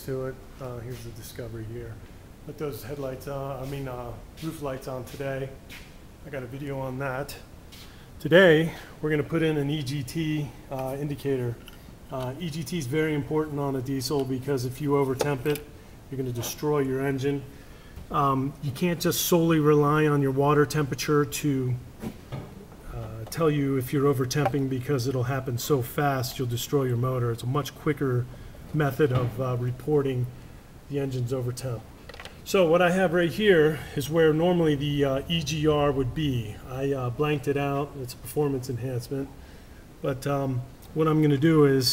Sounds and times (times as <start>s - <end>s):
Speech: 0.0s - 7.5s, 8.2s - 17.5s, 18.1s - 21.8s, 22.8s - 39.4s, 40.0s - 41.9s.